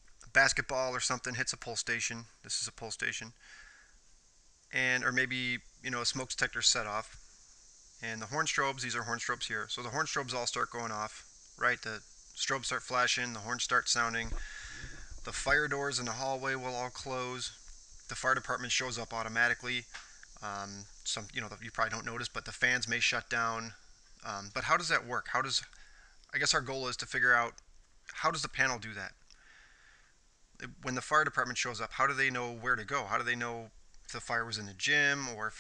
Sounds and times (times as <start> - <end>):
Speech: 0.3 - 3.4, 4.7 - 7.2, 8.0 - 14.4, 15.2 - 29.2, 30.6 - 35.6.